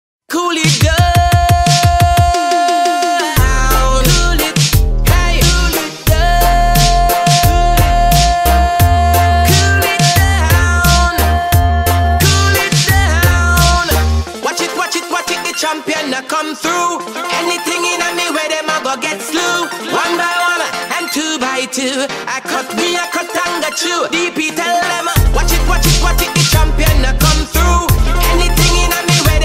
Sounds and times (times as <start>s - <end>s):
Reggae: 0.3s - 29.4s.